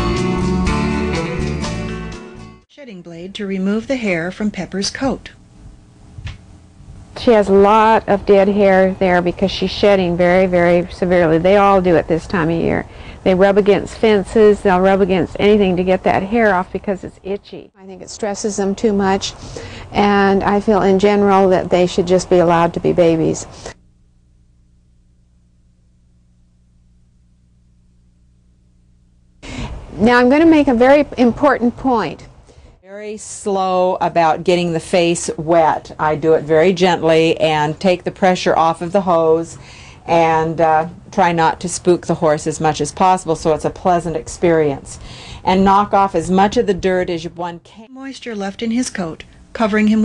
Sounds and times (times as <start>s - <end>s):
Speech: 2.7s - 5.4s, 7.2s - 23.5s, 30.0s - 32.3s, 32.9s - 50.0s.